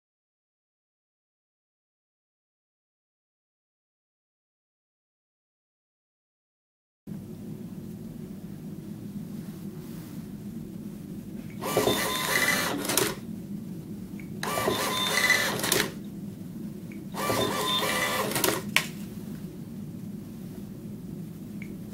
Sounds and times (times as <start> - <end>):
Printer: 11.6 - 13.2, 14.4 - 16.0, 17.1 - 18.8.